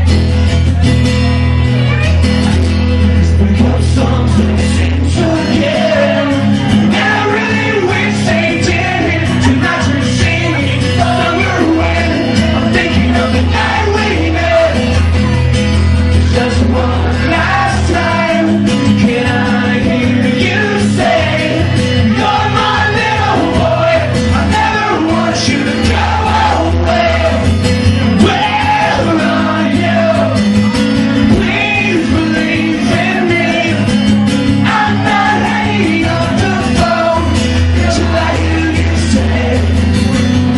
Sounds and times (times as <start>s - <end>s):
Music: 0.0s - 40.5s.